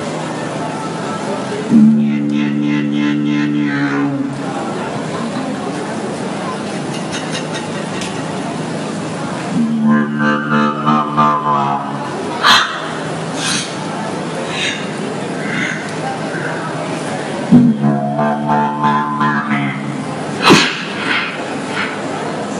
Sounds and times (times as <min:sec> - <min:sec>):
Beatboxing: 0:01.7 - 0:04.5, 0:06.6 - 0:08.5, 0:09.5 - 0:13.8, 0:17.5 - 0:22.2.